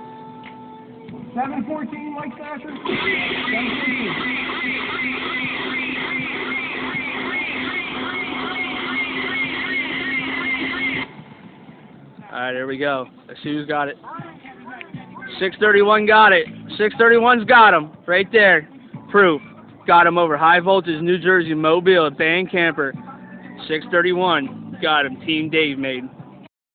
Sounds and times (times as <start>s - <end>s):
Speech: 1.4s - 2.9s, 15.2s - 23.0s, 23.6s - 26.1s.